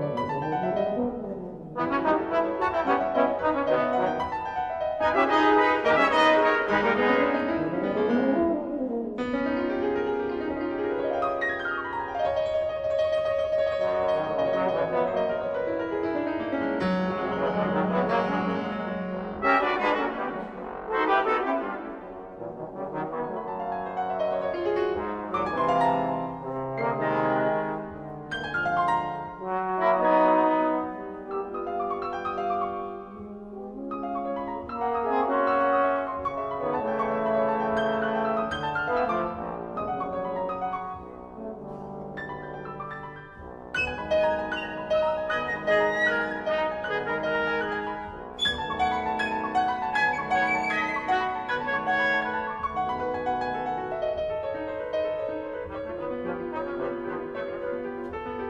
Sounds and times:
Inside, large room or hall: 0.0s - 58.4s
Orchestra: 0.0s - 58.4s
Piano: 0.0s - 58.4s
Trumpet: 0.0s - 58.4s.

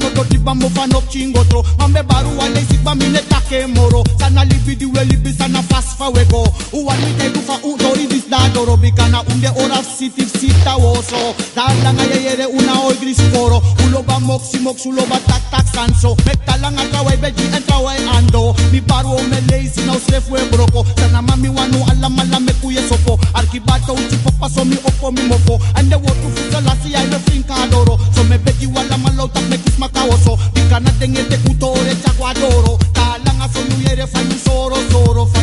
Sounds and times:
Music of Africa: 0.0s - 35.4s
Reggae: 0.0s - 35.4s.

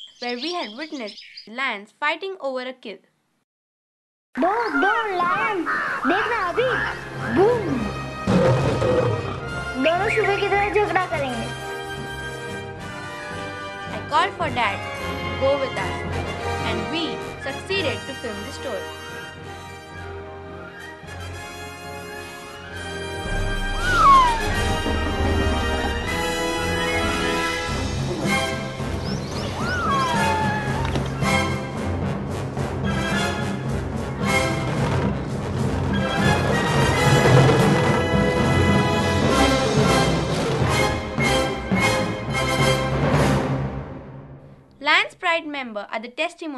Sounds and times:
Speech: 4.4s - 7.8s, 44.8s - 46.5s
Music: 6.1s - 44.7s
Roaring cats (lions, tigers): 8.3s - 9.4s.

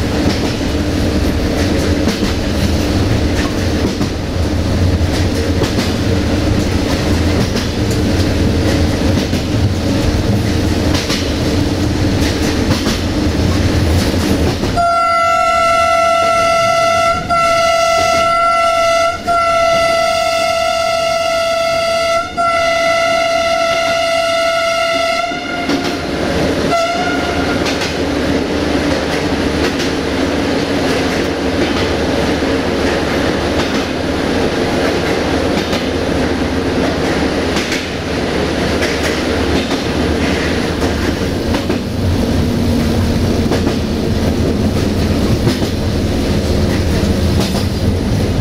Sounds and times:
Railroad car, train wagon: 0.0s - 48.4s
Train horn: 14.8s - 26.1s, 26.7s - 27.8s
Train whistle: 14.8s - 26.1s, 26.7s - 27.8s.

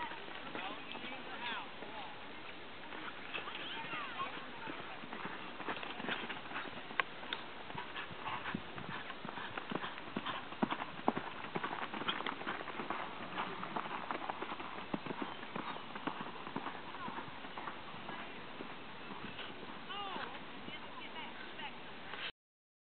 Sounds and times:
Clip-clop: 0.0s - 22.3s
Speech: 2.8s - 5.5s, 19.9s - 21.8s.

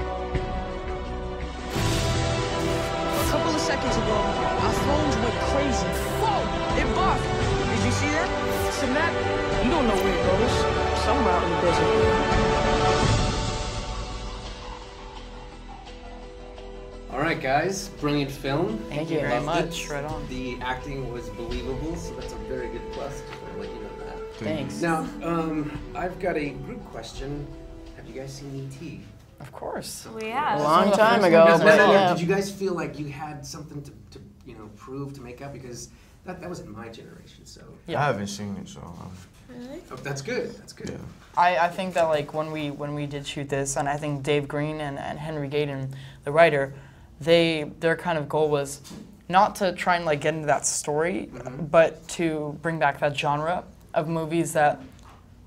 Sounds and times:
Music: 0.0s - 47.8s
Speech: 28.1s - 35.8s.

